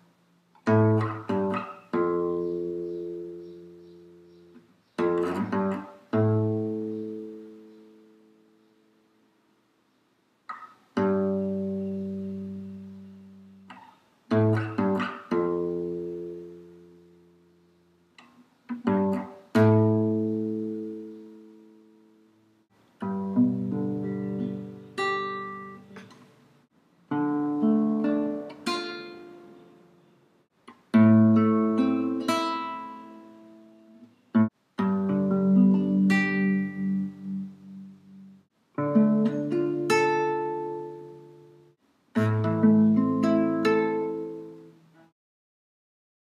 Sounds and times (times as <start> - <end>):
Acoustic guitar: 0.0 - 9.0, 10.4 - 45.1.